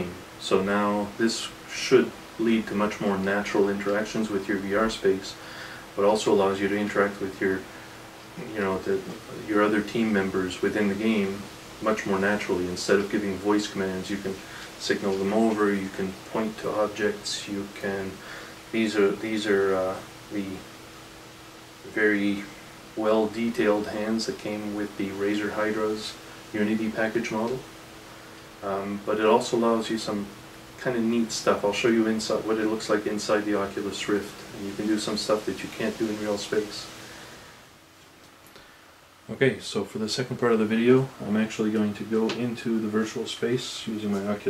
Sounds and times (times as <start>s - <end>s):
Speech: 0.0s - 5.4s, 6.0s - 7.7s, 8.4s - 20.7s, 21.8s - 27.7s, 28.6s - 37.0s, 39.3s - 44.5s.